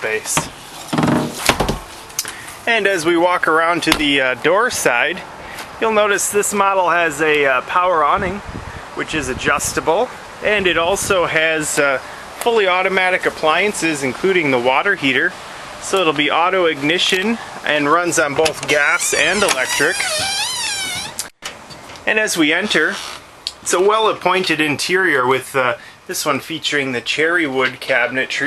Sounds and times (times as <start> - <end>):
Speech: 0.0 - 0.5, 2.7 - 20.2, 22.0 - 28.4
Vehicle: 0.0 - 3.1, 3.7 - 12.5
Outside, urban or manmade: 0.0 - 28.4.